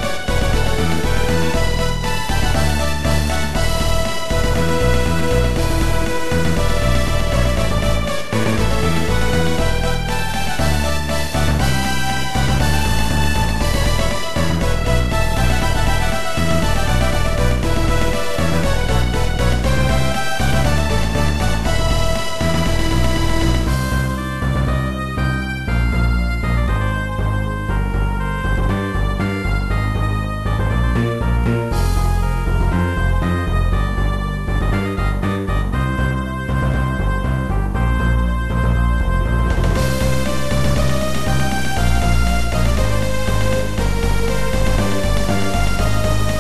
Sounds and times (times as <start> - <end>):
Soundtrack music: 0.0 - 46.4.